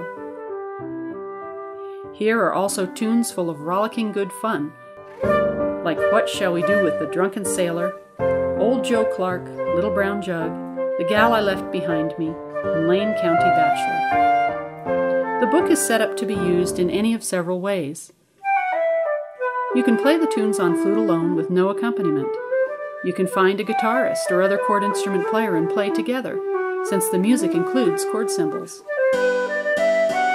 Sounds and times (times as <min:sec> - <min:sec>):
Flute: 0:00.0 - 0:02.0, 0:04.7 - 0:16.8, 0:18.4 - 0:30.3
Speech: 0:02.2 - 0:04.8, 0:05.8 - 0:07.9, 0:08.6 - 0:14.1, 0:15.4 - 0:18.1, 0:19.8 - 0:22.4, 0:23.1 - 0:28.9.